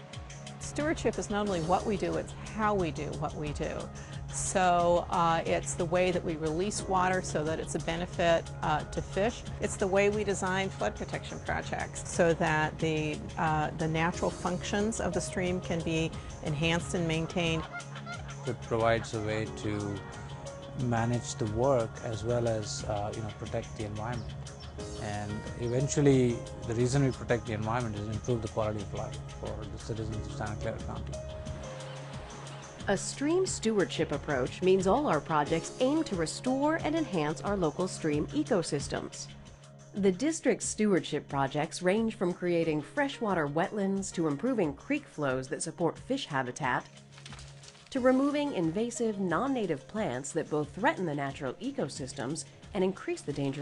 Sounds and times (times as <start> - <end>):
Music: 0.0 - 53.6.